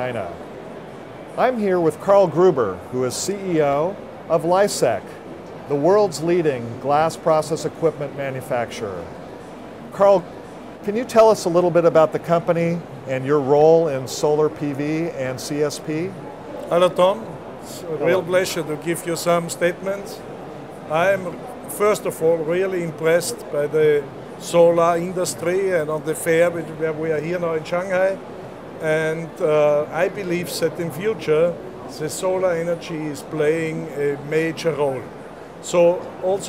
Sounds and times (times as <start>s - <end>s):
Speech: 1.4s - 9.1s, 9.9s - 20.2s, 20.9s - 28.2s, 28.8s - 36.4s.